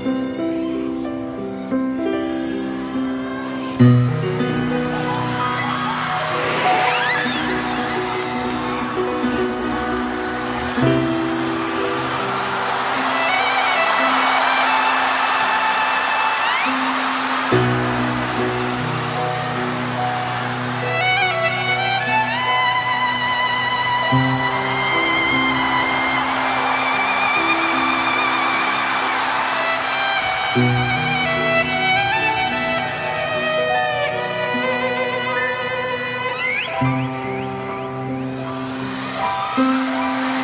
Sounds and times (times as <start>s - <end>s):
Violin, fiddle: 0.0s - 40.4s.